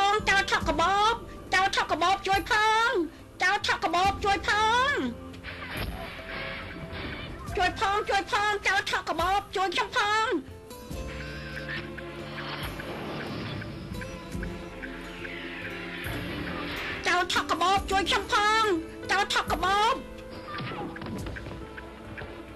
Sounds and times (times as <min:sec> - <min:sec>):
Speech: 0:00.0 - 0:05.1, 0:07.5 - 0:10.4, 0:17.1 - 0:20.0
Music: 0:00.0 - 0:22.5.